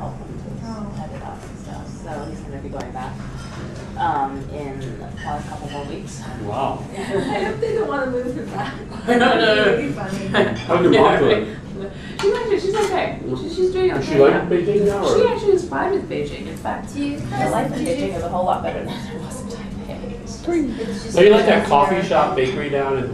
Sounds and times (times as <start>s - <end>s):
Speech: 13.9s - 23.1s.